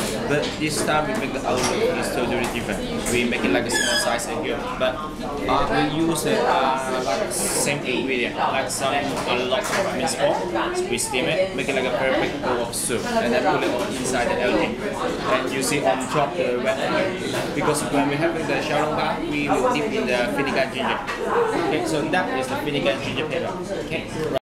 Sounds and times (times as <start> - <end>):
Speech: 0.0 - 24.4.